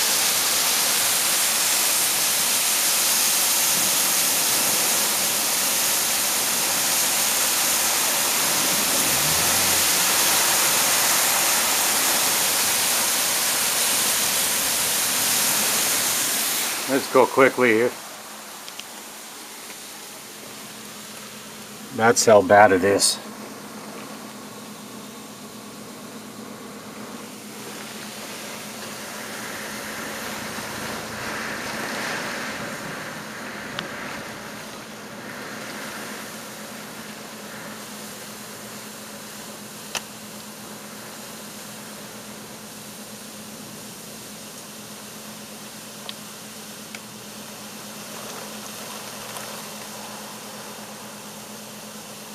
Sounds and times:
Speech: 0:16.9 - 0:18.0, 0:21.9 - 0:23.3.

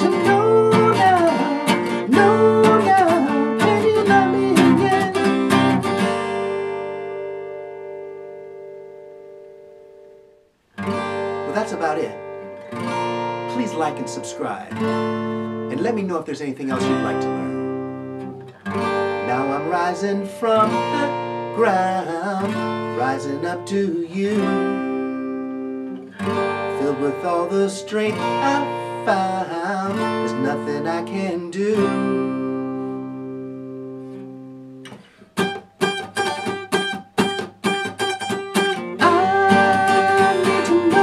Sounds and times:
Strum: 0:00.0 - 0:10.2, 0:10.8 - 0:41.0
Acoustic guitar: 0:00.0 - 0:41.0.

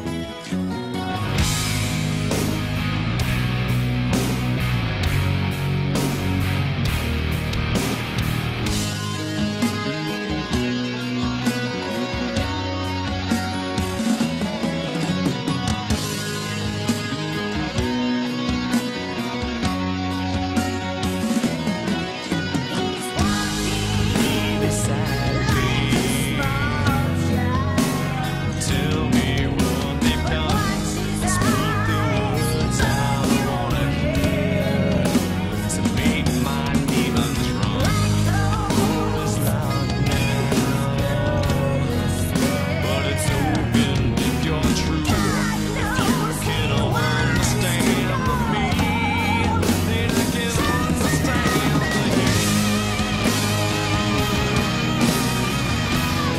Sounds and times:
Music: 0:00.0 - 0:56.3.

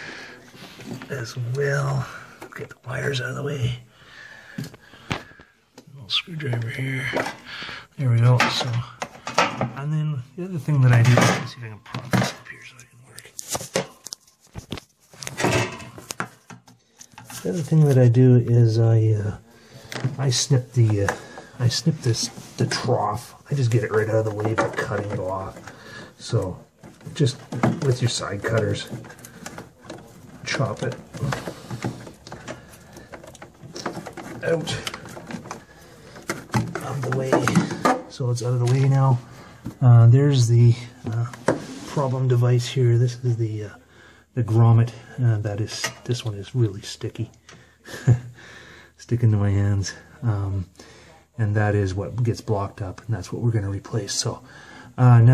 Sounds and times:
Inside, small room: 0:00.0 - 0:55.3
Speech: 0:01.1 - 0:03.9, 0:05.9 - 0:07.4, 0:08.0 - 0:09.0, 0:09.7 - 0:13.4, 0:17.4 - 0:19.4, 0:20.2 - 0:25.6, 0:26.2 - 0:29.0, 0:30.4 - 0:31.5, 0:34.4 - 0:35.0, 0:36.6 - 0:39.2, 0:39.8 - 0:43.8, 0:44.4 - 0:47.4, 0:49.0 - 0:55.3.

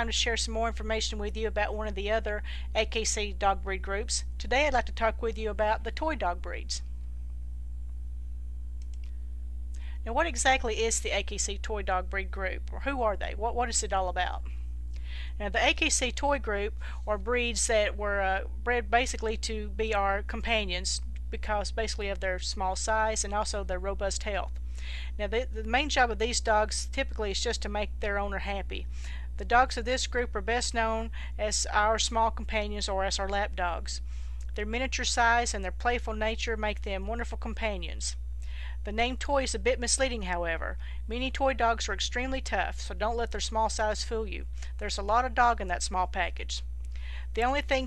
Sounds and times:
Speech: 0:00.0 - 0:06.8, 0:10.0 - 0:14.5, 0:15.4 - 0:24.5, 0:25.2 - 0:34.0, 0:34.6 - 0:38.2, 0:38.8 - 0:46.7, 0:47.4 - 0:47.8.

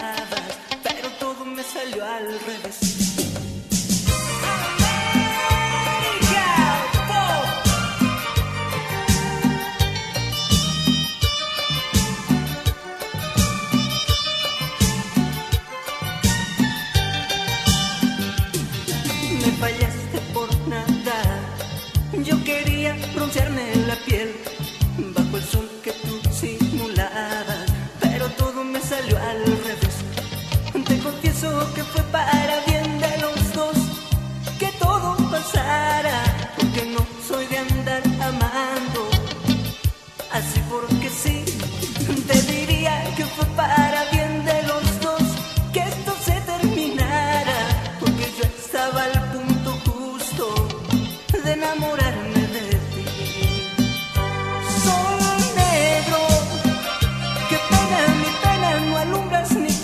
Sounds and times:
Music: 0:00.0 - 0:59.8.

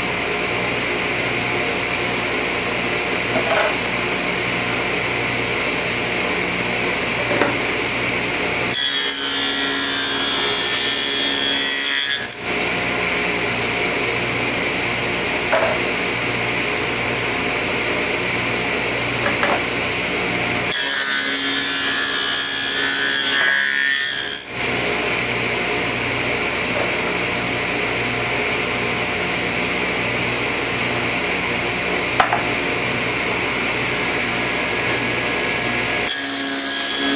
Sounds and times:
Power tool: 0:00.0 - 0:37.1.

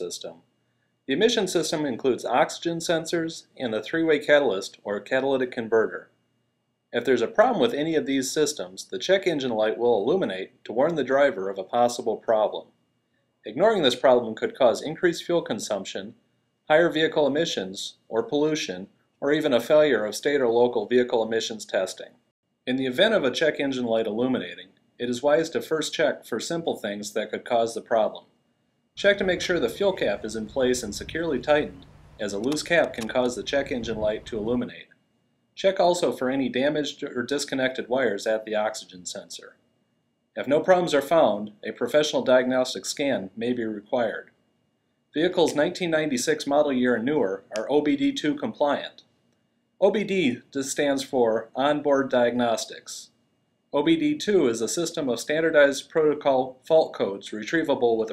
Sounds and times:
Speech: 0:00.0 - 0:00.5, 0:01.1 - 0:06.2, 0:06.9 - 0:12.8, 0:13.4 - 0:28.3, 0:29.0 - 0:34.9, 0:35.6 - 0:39.6, 0:40.4 - 0:44.4, 0:45.2 - 0:49.0, 0:49.8 - 0:53.1, 0:53.8 - 0:58.1.

